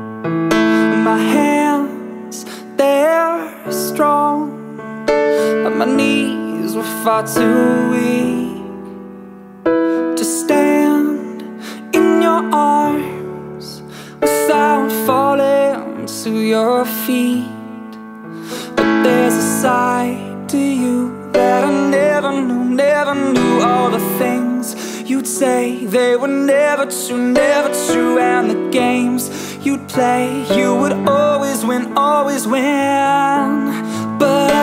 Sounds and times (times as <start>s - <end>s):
Music: 0.0s - 34.6s.